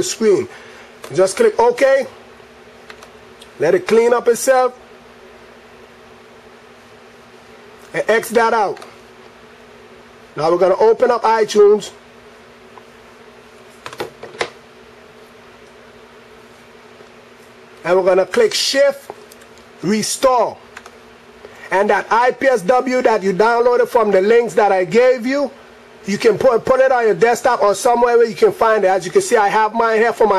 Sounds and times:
Speech: 0.0 - 0.5, 1.1 - 2.2, 3.6 - 4.8, 7.9 - 9.0, 10.4 - 12.0, 17.8 - 19.2, 19.8 - 20.6, 21.7 - 30.3
Inside, small room: 0.0 - 30.3.

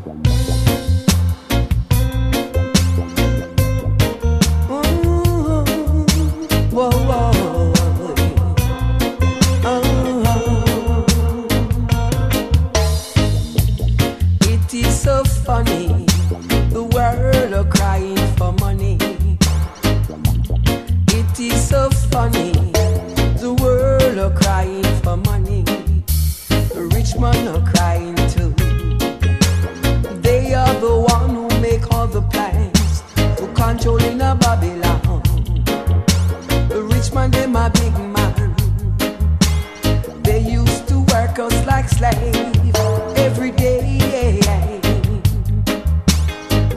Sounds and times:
Music: 0.0 - 46.7.

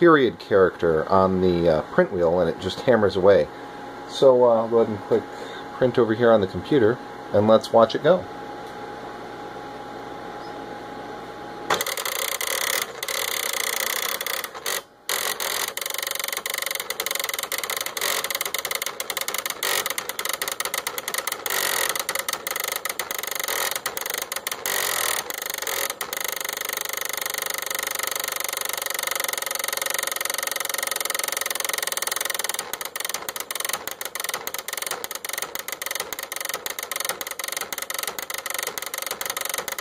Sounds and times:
Speech: 0.0 - 3.5, 4.1 - 8.3.

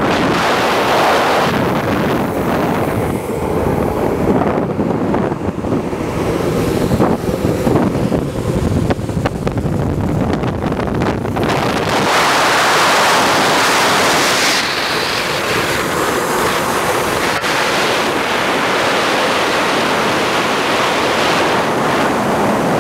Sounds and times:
Skateboard: 9.2 - 22.8.

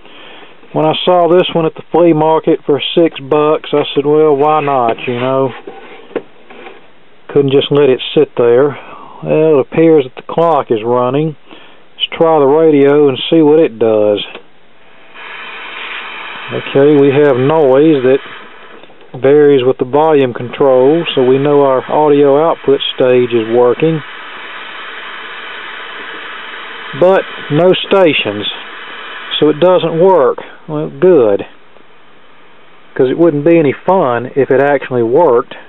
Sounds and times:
Speech: 0.7 - 5.6, 7.3 - 11.4, 12.0 - 14.4, 16.5 - 18.2, 19.2 - 24.1, 27.0 - 28.6, 29.3 - 31.6, 33.0 - 35.6.

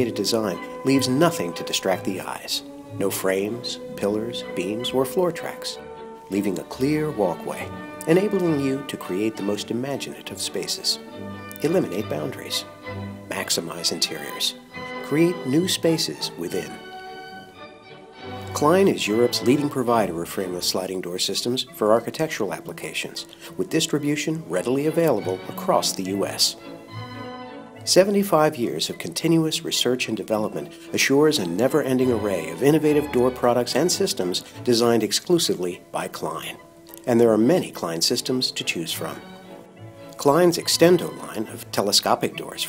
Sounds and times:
Speech: 0.0 - 11.0, 11.6 - 12.7, 13.3 - 16.8, 18.5 - 26.6, 27.9 - 39.2, 40.2 - 42.6
Music: 0.0 - 42.6.

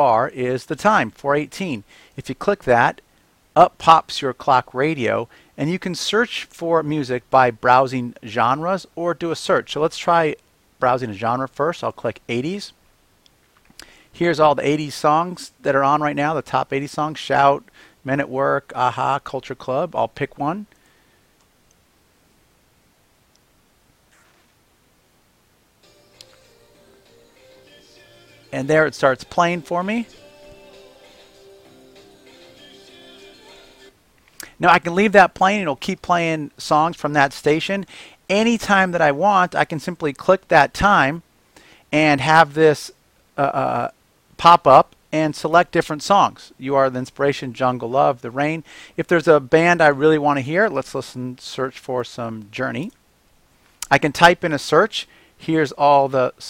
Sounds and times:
Speech: 0.0 - 3.0, 3.6 - 12.8, 14.2 - 20.7, 28.6 - 30.2, 34.6 - 41.2, 41.9 - 53.0, 53.8 - 56.4.

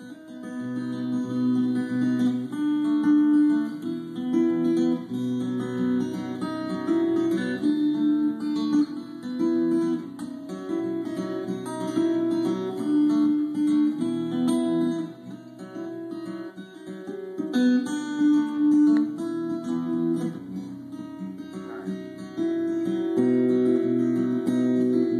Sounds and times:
Music: 0.0 - 25.1.

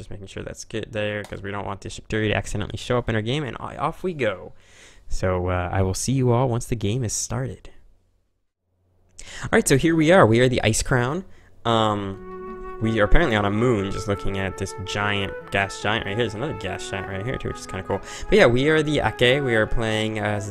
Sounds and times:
Speech: 0.0 - 7.8, 9.4 - 12.2, 12.8 - 20.5
Music: 11.7 - 20.5.

